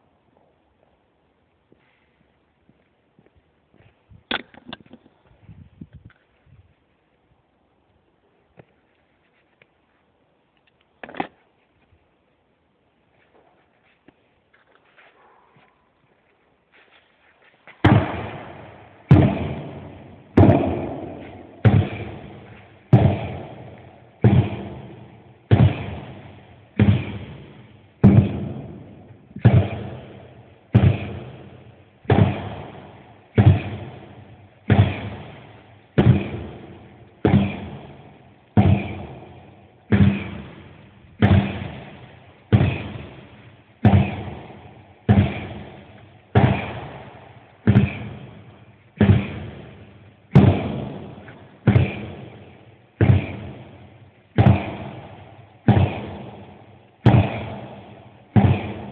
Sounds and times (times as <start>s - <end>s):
Hammer: 17.8s - 58.9s.